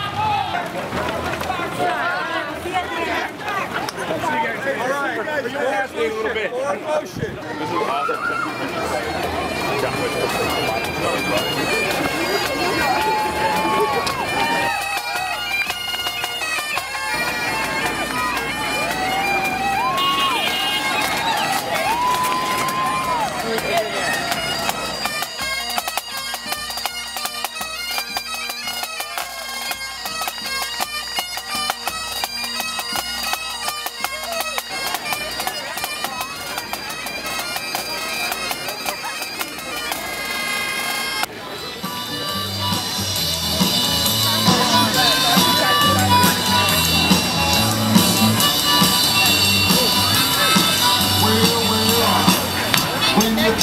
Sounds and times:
Speech: 0:00.0 - 0:14.8, 0:34.0 - 0:53.6
Crowd: 0:00.0 - 0:53.6
Music: 0:08.0 - 0:53.6.

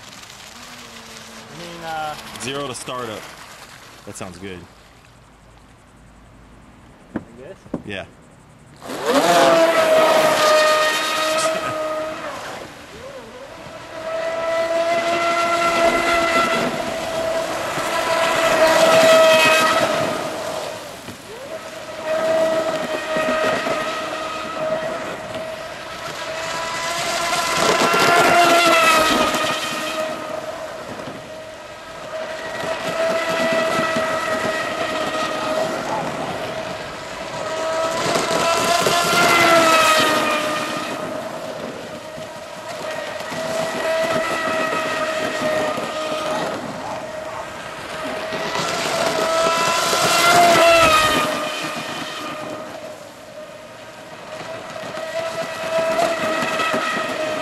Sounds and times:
Boat, Water vehicle: 0:00.0 - 0:57.4
Outside, rural or natural: 0:00.0 - 0:57.4.

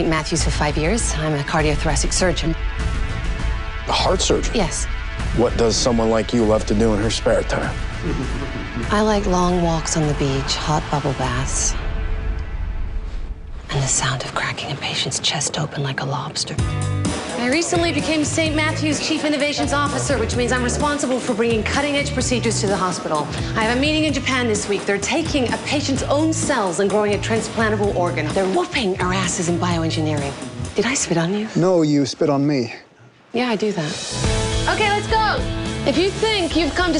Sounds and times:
Music: 0:00.0 - 0:14.0, 0:15.0 - 0:31.4, 0:33.6 - 0:36.9.

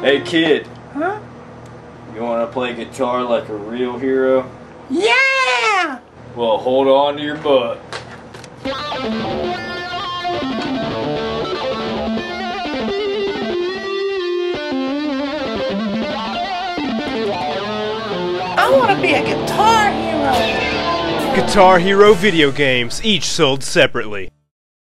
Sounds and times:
Electric guitar: 0:08.6 - 0:23.2
Acoustic guitar: 0:17.0 - 0:23.0
Speech: 0:18.6 - 0:20.5, 0:21.3 - 0:24.3.

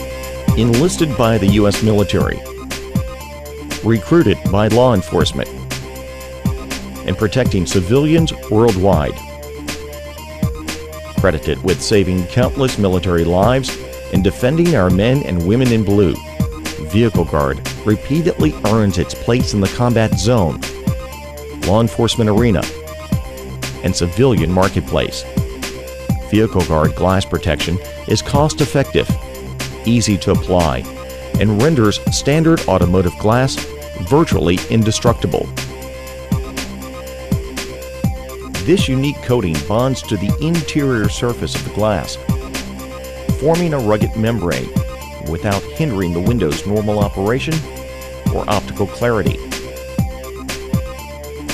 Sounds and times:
Music: 0:00.0 - 0:51.5
Speech: 0:00.6 - 0:02.4, 0:03.9 - 0:05.5, 0:07.1 - 0:09.2, 0:11.2 - 0:16.2, 0:16.8 - 0:20.6, 0:21.7 - 0:22.7, 0:23.8 - 0:25.3, 0:26.3 - 0:29.2, 0:29.9 - 0:35.5, 0:38.6 - 0:42.2, 0:43.4 - 0:47.7, 0:48.3 - 0:49.4.

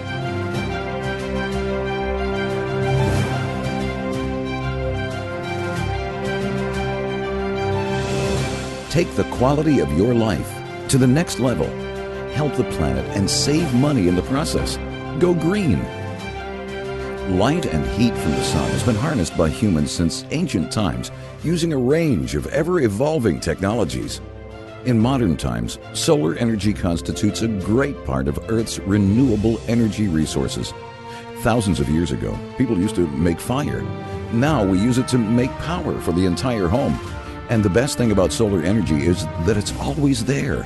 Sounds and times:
Music: 0:00.0 - 0:40.6
Speech: 0:08.9 - 0:15.9, 0:17.2 - 0:24.2, 0:24.8 - 0:40.6.

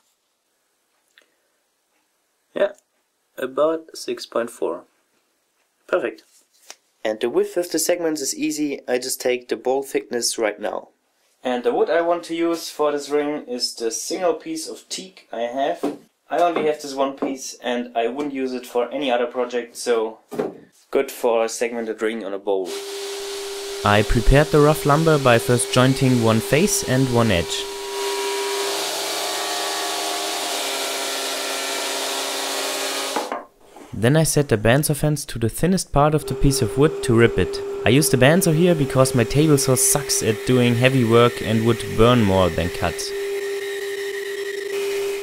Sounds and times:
Sawing: 0:22.7 - 0:33.3, 0:36.2 - 0:45.2
Wood: 0:33.0 - 0:33.9.

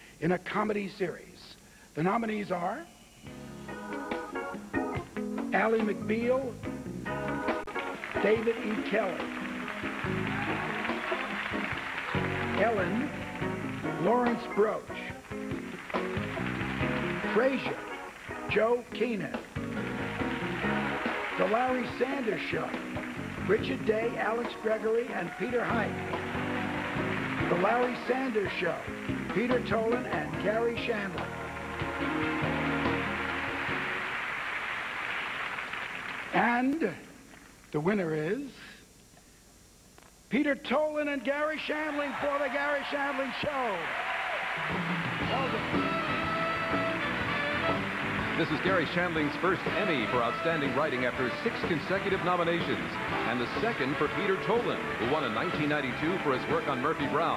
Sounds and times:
Speech: 0:00.2 - 0:02.9, 0:05.6 - 0:06.6, 0:08.2 - 0:09.2, 0:12.6 - 0:13.1, 0:14.0 - 0:15.1, 0:18.5 - 0:19.4, 0:21.4 - 0:22.8, 0:23.4 - 0:25.9, 0:27.5 - 0:31.2, 0:36.4 - 0:37.1, 0:37.7 - 0:38.8, 0:40.3 - 0:43.8, 0:48.4 - 0:57.3
Music: 0:02.2 - 0:36.8, 0:41.4 - 0:57.3.

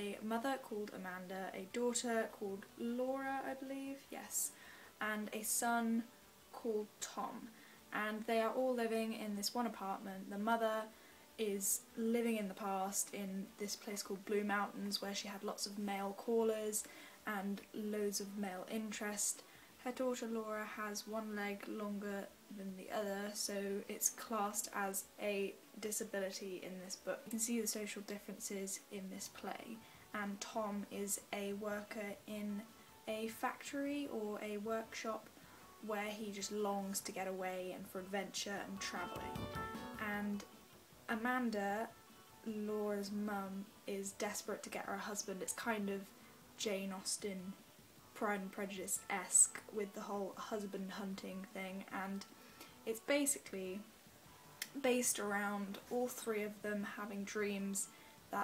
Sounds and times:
Speech: 0:00.0 - 0:39.4, 0:40.0 - 0:40.5, 0:41.1 - 0:41.9, 0:42.5 - 0:47.6, 0:48.2 - 0:52.3, 0:52.9 - 0:53.9, 0:54.6 - 0:58.4.

